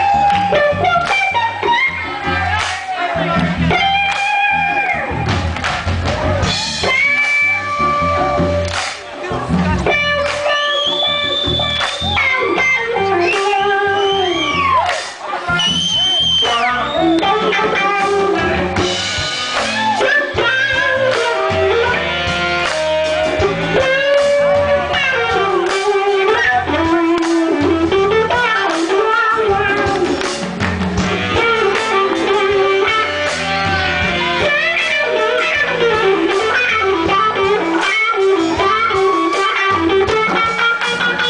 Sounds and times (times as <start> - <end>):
Bass guitar: 0.0 - 41.2
Electric guitar: 0.0 - 41.2.